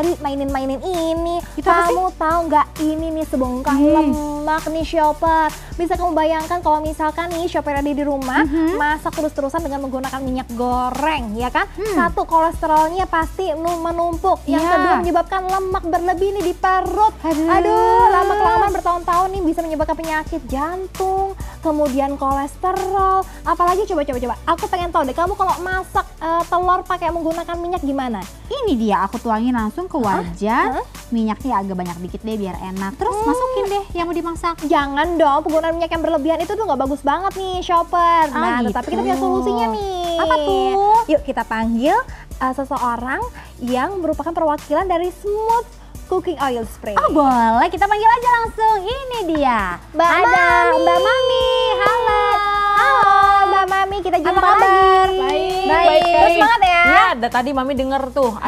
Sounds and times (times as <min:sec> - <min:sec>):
Music: 0:00.0 - 0:58.4.